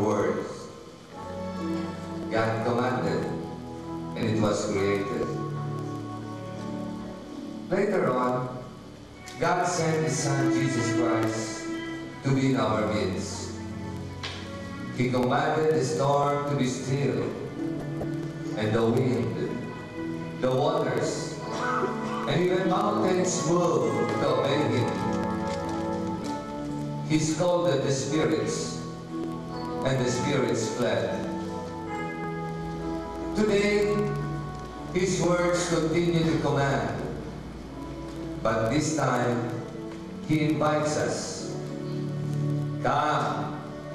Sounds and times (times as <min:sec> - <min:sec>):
Speech: 0:00.0 - 0:00.8, 0:02.3 - 0:03.4, 0:04.2 - 0:05.4, 0:07.7 - 0:08.6, 0:09.4 - 0:11.6, 0:12.2 - 0:13.6, 0:15.0 - 0:17.5, 0:18.6 - 0:19.6, 0:20.4 - 0:21.4, 0:22.2 - 0:25.1, 0:27.1 - 0:28.8, 0:29.8 - 0:31.3, 0:33.4 - 0:34.1, 0:35.0 - 0:37.2, 0:38.4 - 0:39.6, 0:40.3 - 0:41.6, 0:42.8 - 0:43.6
Music: 0:00.0 - 0:43.9.